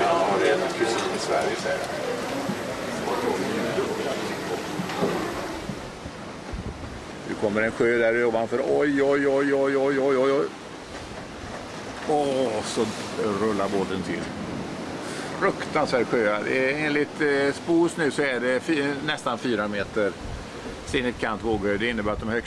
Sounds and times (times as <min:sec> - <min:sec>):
Ocean: 0:00.0 - 0:22.4
Speech: 0:07.3 - 0:10.5, 0:12.0 - 0:14.4, 0:15.4 - 0:20.2, 0:20.9 - 0:22.4.